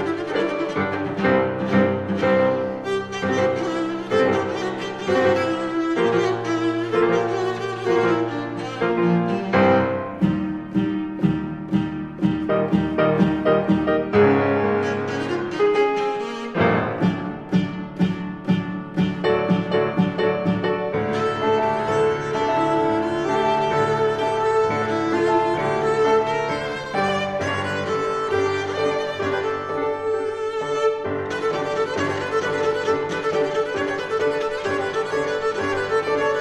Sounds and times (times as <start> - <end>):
Cello: 0.0 - 36.4
Double bass: 9.4 - 15.4.